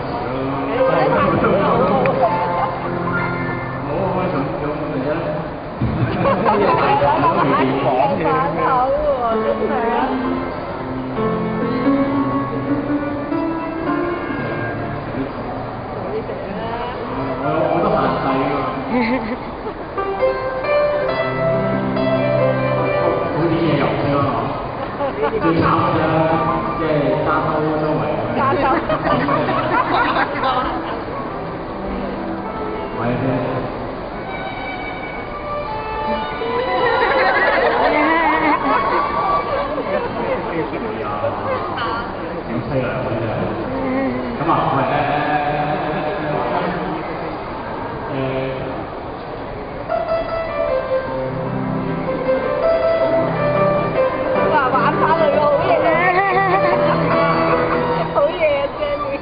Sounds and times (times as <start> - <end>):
Musical instrument: 0.7 - 4.6, 6.2 - 15.6, 19.9 - 40.2, 49.9 - 59.2.